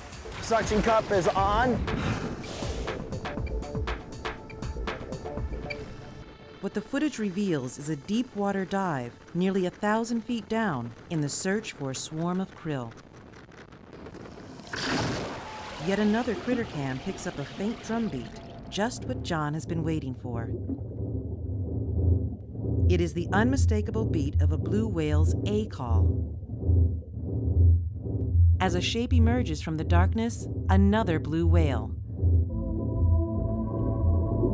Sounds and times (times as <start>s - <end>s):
Speech: 0.4s - 1.8s, 6.6s - 12.9s, 15.8s - 20.5s, 22.9s - 26.1s, 28.6s - 32.0s.